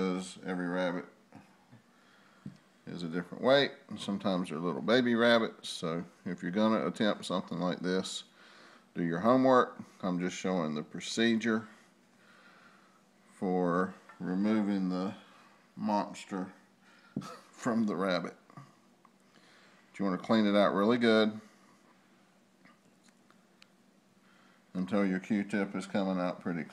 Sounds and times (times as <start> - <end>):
Speech: 0.0 - 1.2, 2.9 - 8.3, 9.0 - 11.8, 13.4 - 15.2, 15.8 - 16.6, 17.5 - 18.4, 20.0 - 21.5, 24.7 - 26.7.